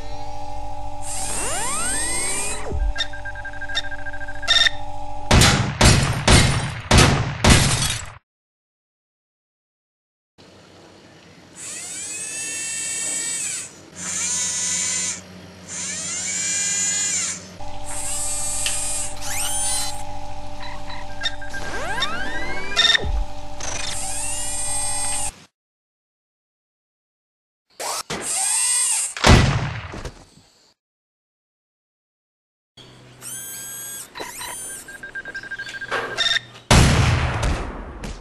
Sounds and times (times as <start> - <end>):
Outside, urban or manmade: 0.0 - 8.2, 10.4 - 25.6, 27.7 - 30.8, 32.8 - 38.2.